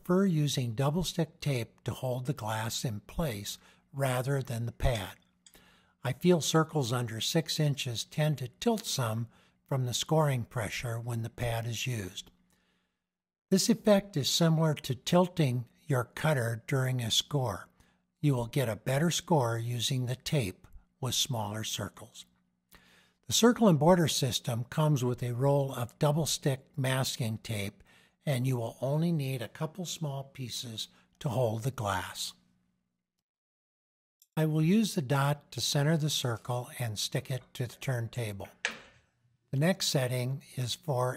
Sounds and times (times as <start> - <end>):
Speech: 0.0 - 5.2, 6.0 - 12.4, 13.5 - 22.3, 23.3 - 32.5, 34.3 - 38.7, 39.5 - 41.1.